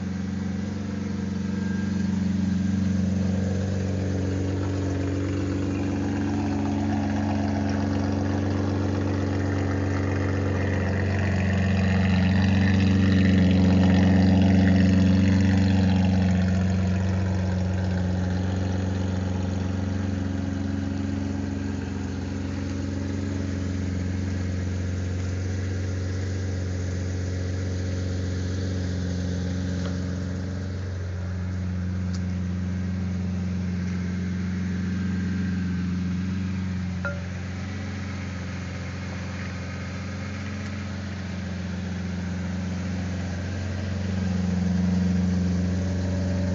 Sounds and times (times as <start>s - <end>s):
Car: 0.0s - 46.5s
Idling: 0.0s - 46.5s
Outside, rural or natural: 0.0s - 46.5s.